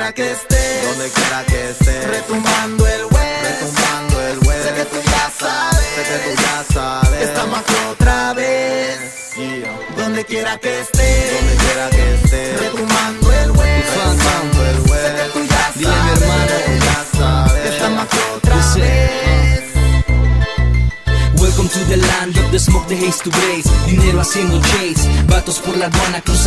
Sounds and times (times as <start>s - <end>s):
Music: 0.0s - 26.4s.